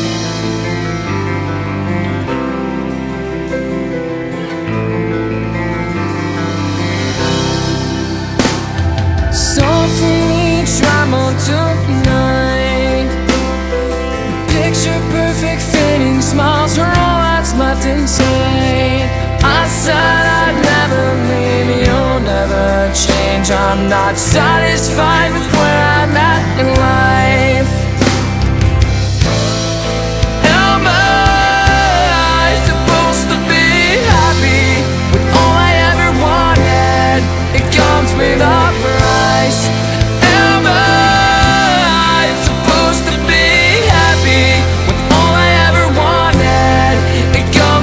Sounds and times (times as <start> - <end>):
Music: 0.0 - 47.8.